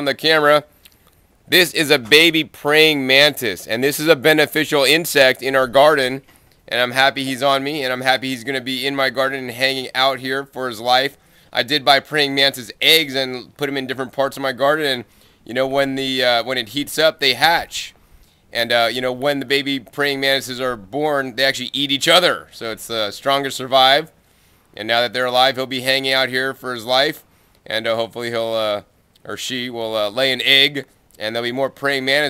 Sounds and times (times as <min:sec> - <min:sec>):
Speech: 0:00.0 - 0:00.7, 0:01.5 - 0:18.0, 0:18.6 - 0:24.2, 0:24.8 - 0:32.2.